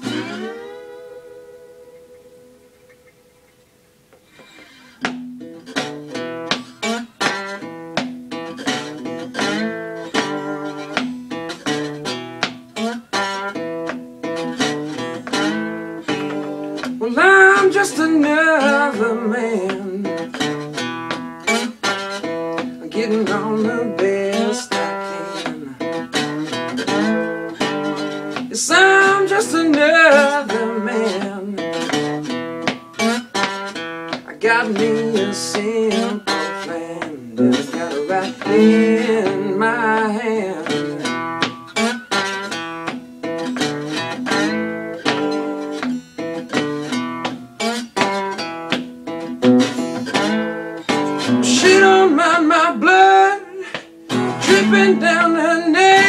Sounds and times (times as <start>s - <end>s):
Guitar: 0.0s - 56.0s.